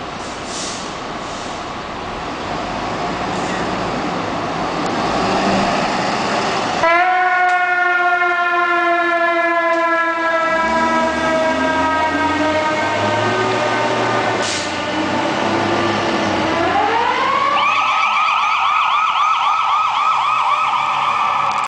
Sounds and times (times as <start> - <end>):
Fire engine, fire truck (siren): 3.0 - 21.6.